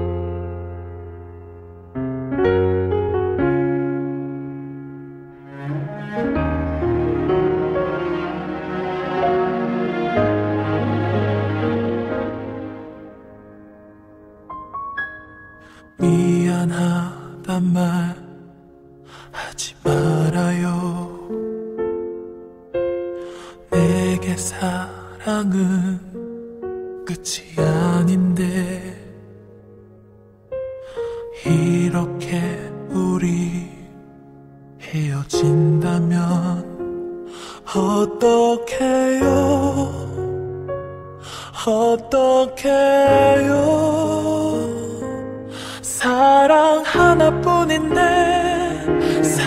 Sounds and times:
Music: 0:00.0 - 0:49.4.

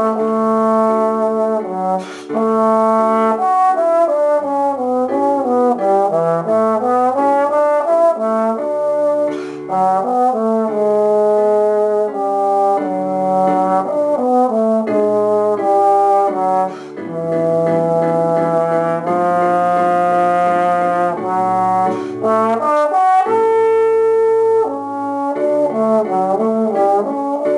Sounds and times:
Trombone: 0:00.0 - 0:27.5.

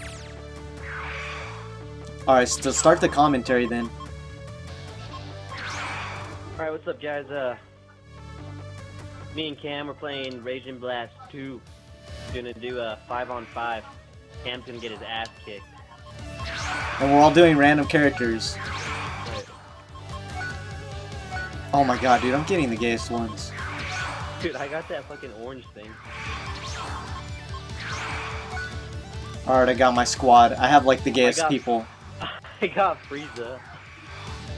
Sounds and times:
Music: 0:00.0 - 0:34.5
Speech: 0:02.3 - 0:03.9, 0:06.6 - 0:07.6, 0:09.4 - 0:11.6, 0:12.3 - 0:15.6, 0:17.0 - 0:18.6, 0:21.7 - 0:23.5, 0:24.4 - 0:26.0, 0:29.5 - 0:31.9.

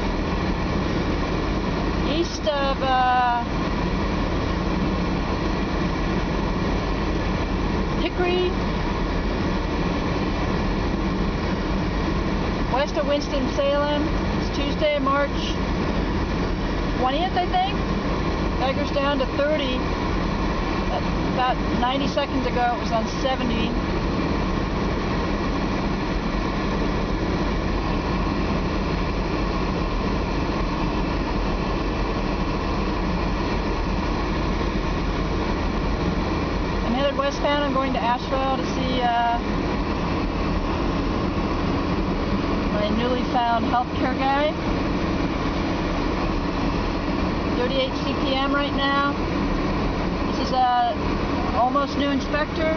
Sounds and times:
Car: 0:00.0 - 0:52.7
Outside, urban or manmade: 0:00.0 - 0:52.7
Speech: 0:02.1 - 0:03.5, 0:08.0 - 0:08.6, 0:12.7 - 0:15.6, 0:17.0 - 0:17.8, 0:18.6 - 0:19.8, 0:20.9 - 0:23.8, 0:36.8 - 0:39.5, 0:42.7 - 0:44.6, 0:47.6 - 0:49.2, 0:50.3 - 0:51.0, 0:51.6 - 0:52.7.

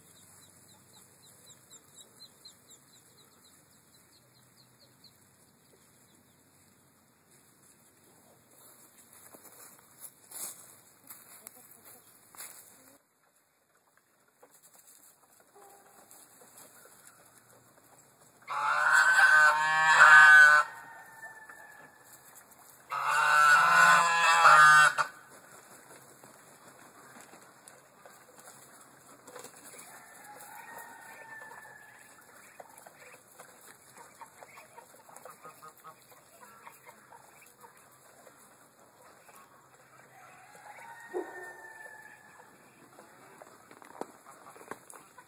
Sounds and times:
Chicken, rooster: 0:10.4 - 0:45.2
Duck: 0:18.5 - 0:20.8, 0:22.9 - 0:25.2, 0:31.4 - 0:40.0.

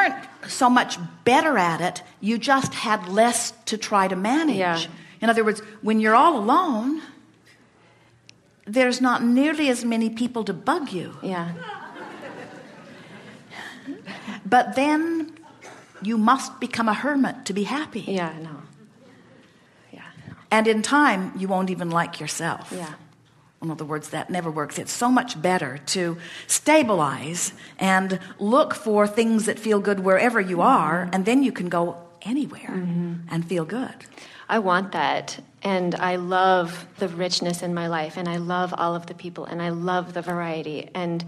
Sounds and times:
Speech: 0:14.5 - 0:18.8, 0:20.0 - 0:41.2.

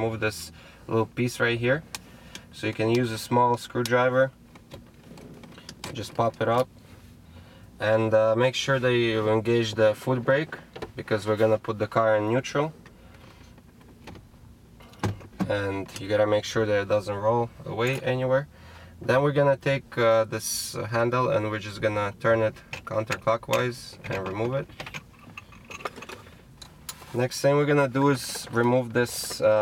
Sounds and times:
Speech: 0:00.0 - 0:01.8, 0:07.8 - 0:12.7, 0:15.4 - 0:24.7, 0:27.2 - 0:29.6.

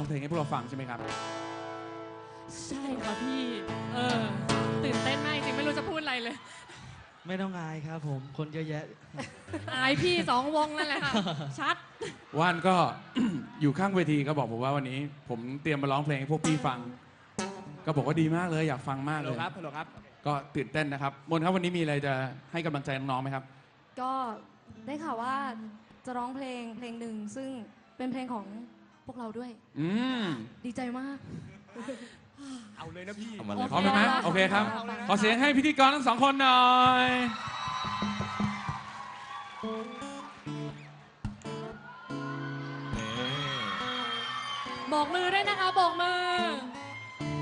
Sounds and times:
Music: 0:00.0 - 0:06.1, 0:16.3 - 0:18.9, 0:33.7 - 0:47.4.

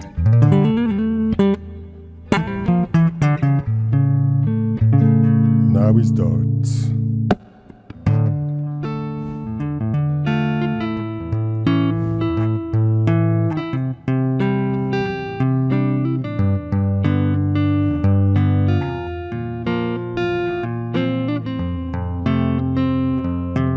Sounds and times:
Electronic tuner: 0:00.0 - 0:23.7
Guitar: 0:00.0 - 0:23.7
Inside, small room: 0:00.0 - 0:23.7
Speech: 0:05.6 - 0:07.0.

